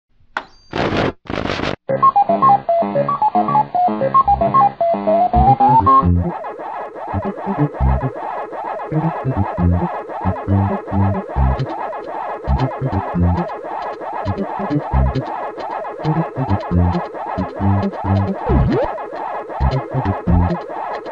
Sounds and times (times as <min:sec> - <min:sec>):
Music: 0:01.9 - 0:21.1.